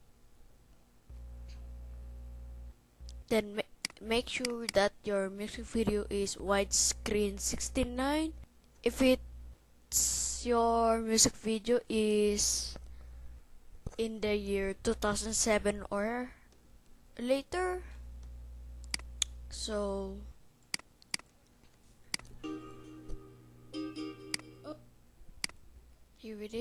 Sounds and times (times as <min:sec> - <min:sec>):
Speech: 0:03.2 - 0:09.2, 0:09.9 - 0:12.8, 0:14.0 - 0:16.4, 0:17.2 - 0:18.0, 0:19.5 - 0:20.4, 0:26.2 - 0:26.6.